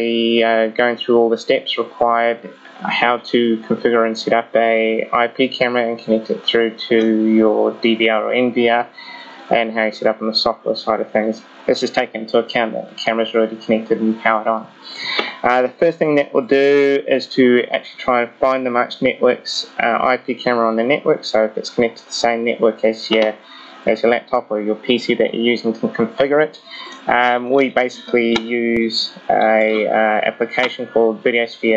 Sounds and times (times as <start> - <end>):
Speech: 0.0 - 31.7.